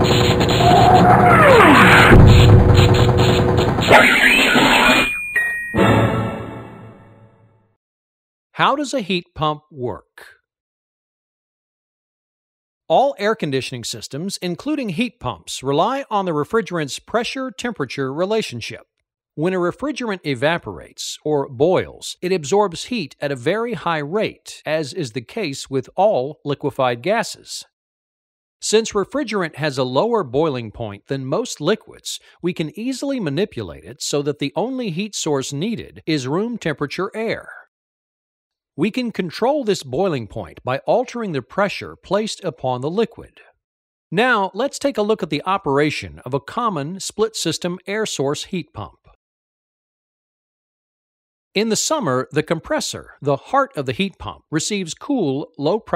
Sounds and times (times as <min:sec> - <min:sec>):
Speech: 0:03.9 - 0:05.1, 0:08.6 - 0:10.4, 0:12.9 - 0:27.8, 0:28.6 - 0:37.7, 0:38.8 - 0:43.6, 0:44.2 - 0:49.2, 0:51.6 - 0:55.9.